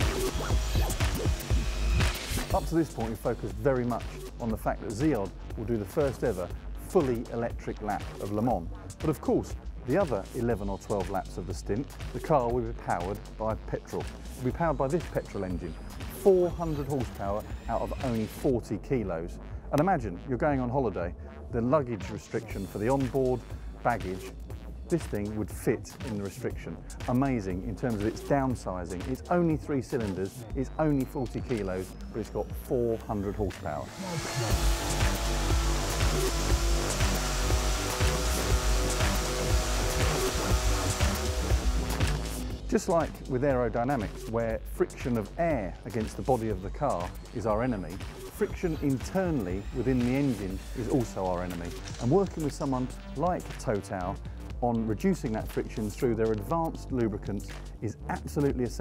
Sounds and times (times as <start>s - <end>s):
Speech: 2.5s - 24.3s, 24.9s - 34.3s, 42.7s - 58.8s.